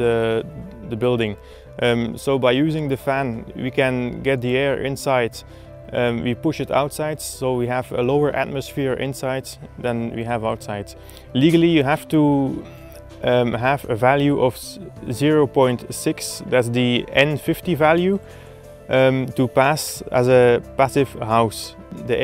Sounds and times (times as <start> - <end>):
Speech: 0.0 - 18.2, 18.9 - 22.2
Music: 0.0 - 22.2.